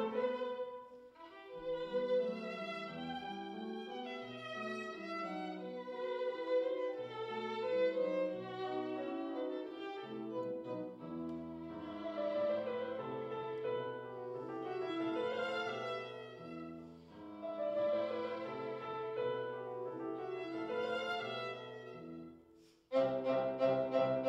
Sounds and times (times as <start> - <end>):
Violin, fiddle: 0.0 - 24.2.